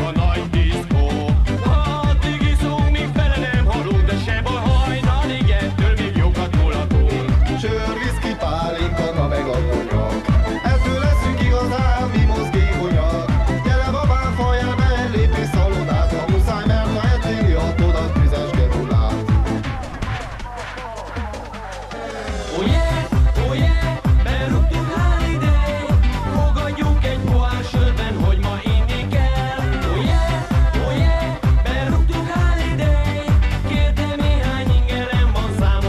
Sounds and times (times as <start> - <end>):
Music: 0.0 - 35.8.